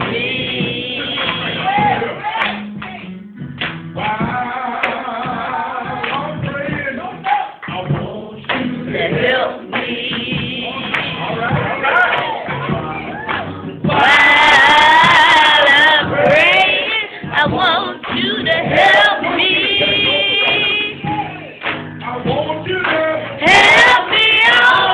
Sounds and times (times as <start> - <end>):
Music: 0.0 - 24.9
Male singing: 4.0 - 11.6, 17.3 - 24.9
Female singing: 13.9 - 21.0, 23.4 - 24.9.